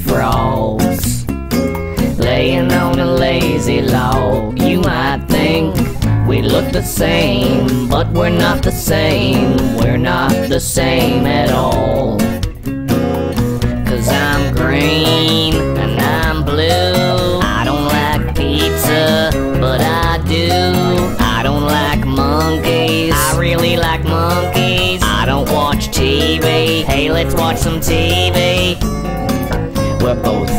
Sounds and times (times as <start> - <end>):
Music: 0.0 - 30.5.